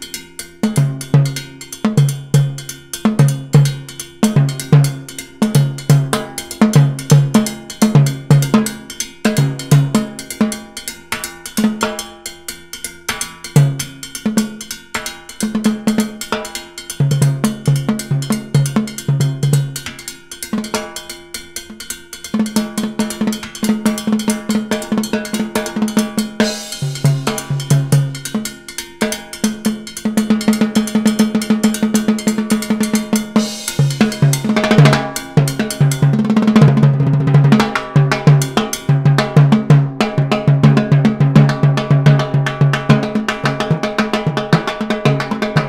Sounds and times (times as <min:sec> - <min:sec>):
Drum kit: 0:00.0 - 0:45.6
Snare drum: 0:29.1 - 0:45.6.